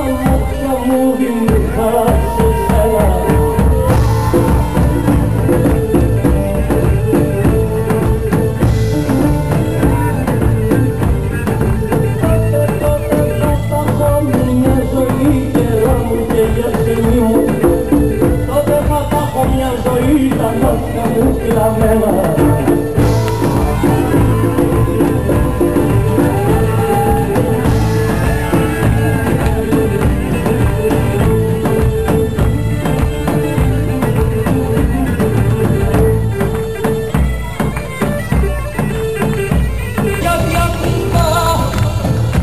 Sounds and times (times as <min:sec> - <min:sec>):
Music: 0:00.0 - 0:42.4.